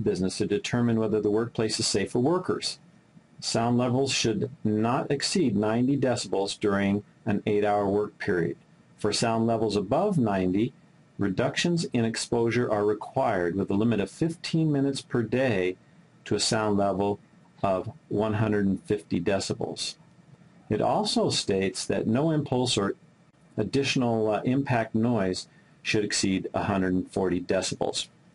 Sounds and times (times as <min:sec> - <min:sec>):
Speech: 0:00.0 - 0:02.8, 0:03.4 - 0:20.0, 0:20.7 - 0:23.0, 0:23.6 - 0:28.2.